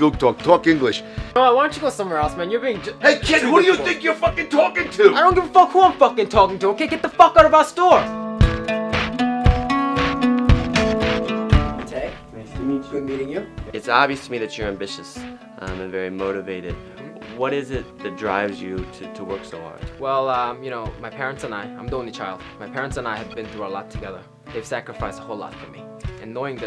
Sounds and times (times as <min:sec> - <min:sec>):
Speech: 0:00.0 - 0:08.1, 0:11.8 - 0:26.6
Music: 0:00.0 - 0:26.6.